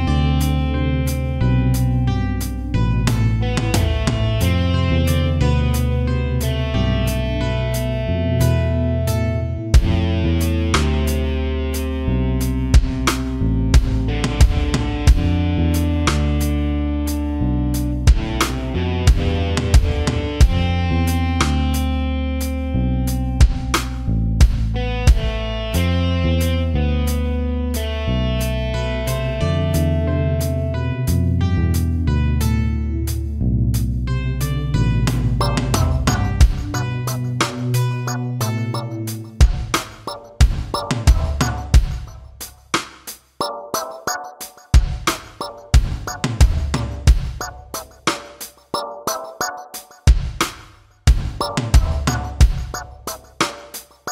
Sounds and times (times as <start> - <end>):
Musical instrument: 34.4 - 41.8.